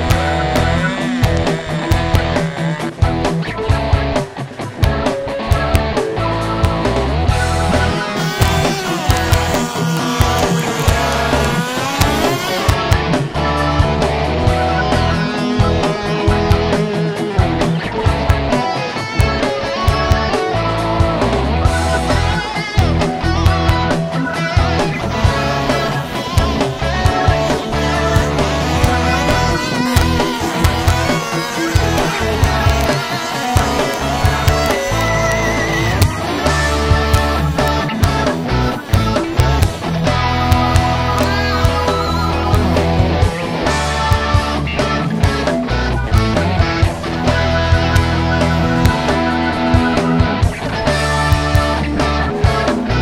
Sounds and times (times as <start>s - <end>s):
Music: 0.0s - 53.0s.